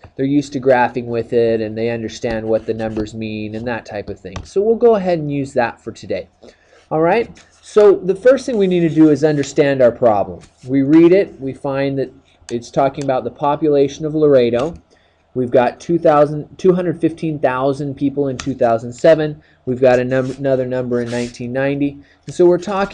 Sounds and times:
Speech: 0.2s - 6.3s, 6.9s - 14.8s, 15.4s - 22.9s.

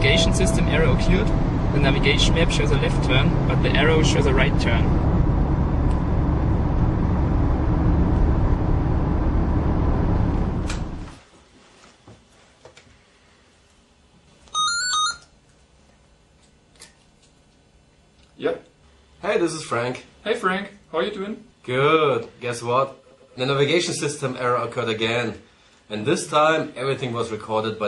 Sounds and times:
Speech: 0.0s - 4.9s, 18.4s - 27.8s.

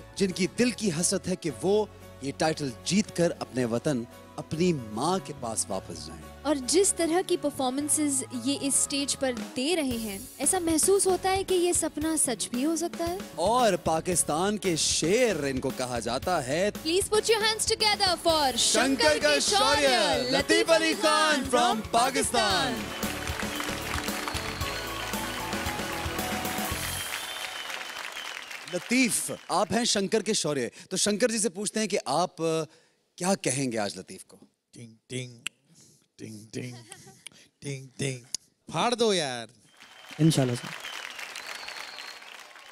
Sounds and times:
Music: 0.0s - 29.6s.

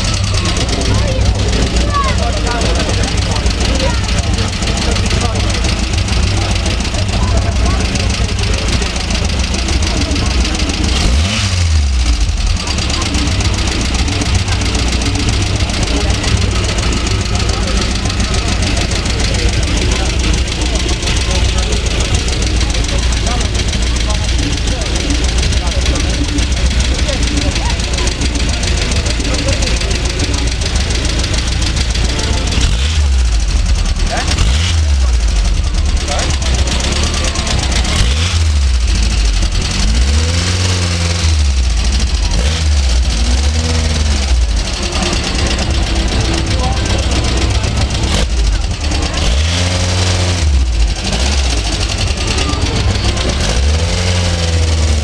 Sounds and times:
Speech: 0.0s - 11.4s, 12.1s - 38.4s, 39.0s - 55.0s
Car: 0.0s - 55.0s.

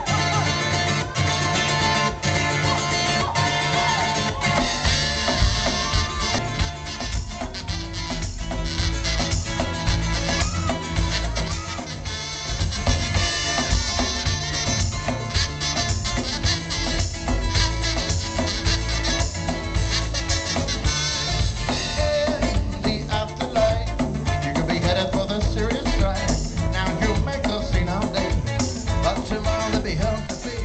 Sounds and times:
Music: 0.0s - 30.6s.

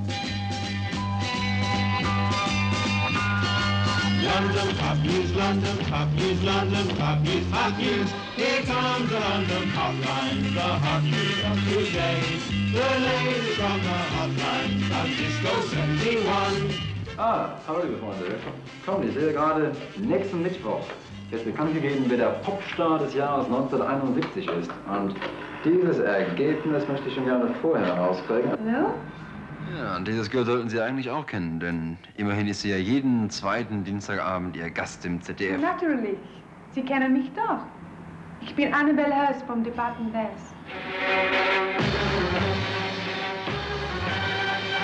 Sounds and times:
Speech: 17.2s - 29.0s, 29.7s - 36.2s.

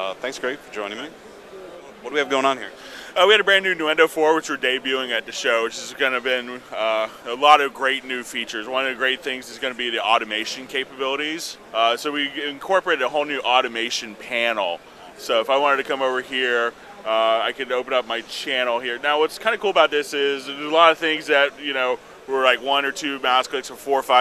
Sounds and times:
Speech: 0.0s - 1.2s, 1.8s - 24.2s.

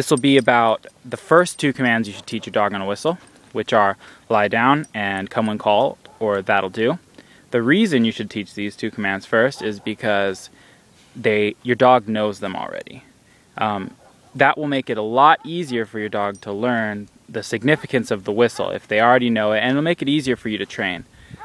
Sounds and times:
Speech: 0.0s - 10.5s, 11.2s - 21.1s.

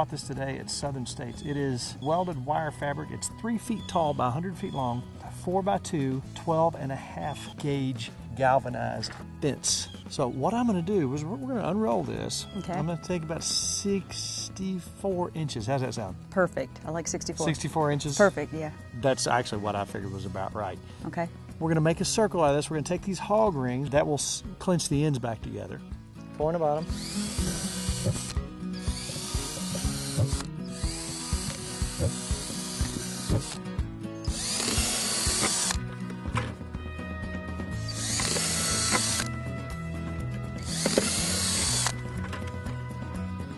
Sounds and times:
Music: 0.0s - 43.5s.

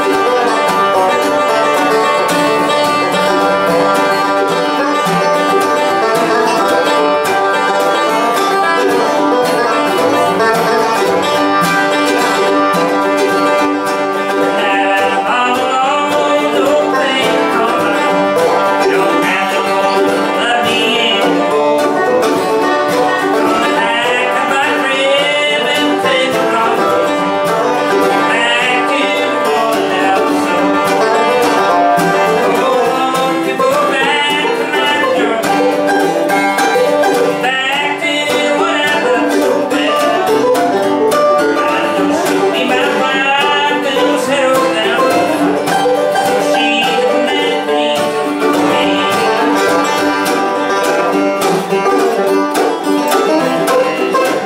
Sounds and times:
Bluegrass: 0.0s - 54.4s.

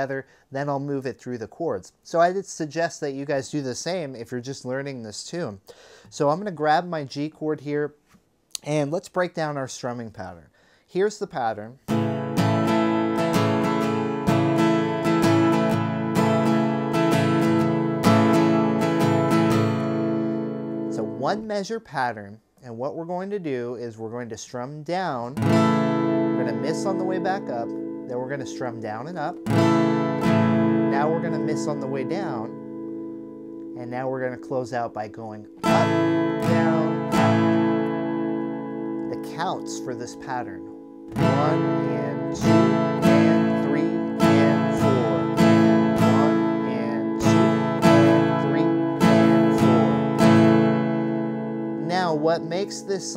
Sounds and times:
Speech: 0.0s - 8.0s, 8.6s - 11.8s, 21.0s - 25.4s, 26.4s - 29.4s, 30.9s - 32.5s, 33.8s - 37.0s, 39.1s - 40.7s, 41.3s - 45.4s, 46.0s - 47.3s, 47.9s - 48.8s, 51.8s - 53.1s
Strum: 11.9s - 21.4s, 25.4s - 53.1s.

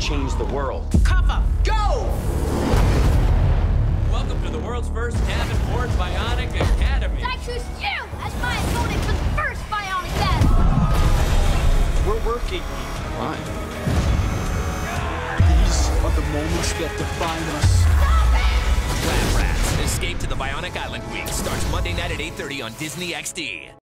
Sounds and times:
Music: 0.0s - 23.8s
Speech: 19.0s - 23.8s.

